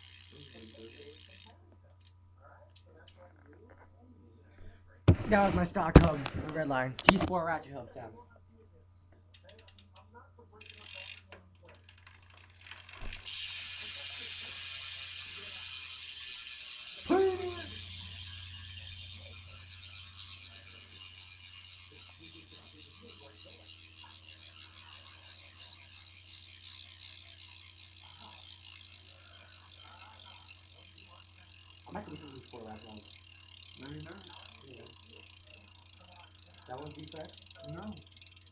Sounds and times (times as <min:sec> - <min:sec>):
Ratchet, pawl: 0:00.0 - 0:03.8, 0:09.3 - 0:38.5.